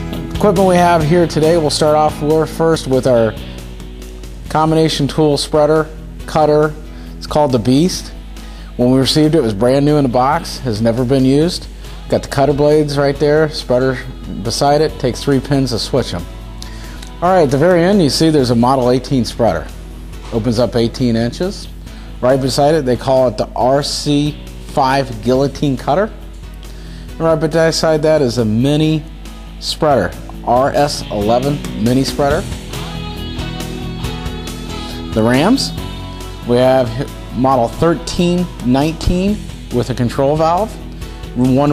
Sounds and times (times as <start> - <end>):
Music: 0.0 - 41.7
Speech: 0.4 - 3.4, 4.5 - 8.2, 8.8 - 16.3, 17.2 - 19.7, 20.3 - 26.2, 27.2 - 32.5, 35.1 - 35.8, 36.4 - 40.8, 41.4 - 41.7.